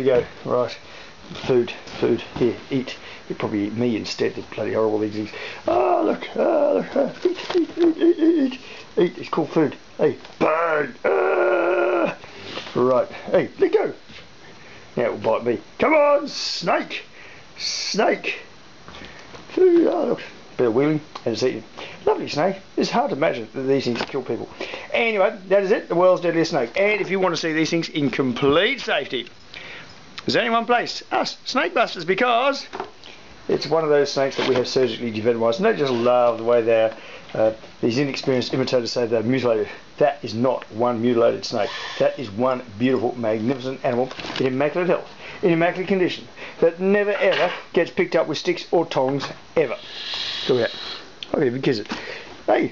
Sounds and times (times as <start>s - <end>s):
Speech: 0.0s - 14.0s, 15.0s - 18.5s, 19.5s - 29.3s, 30.2s - 32.8s, 33.5s - 49.8s, 50.5s - 51.9s, 52.5s - 52.7s
Inside, small room: 0.0s - 52.7s.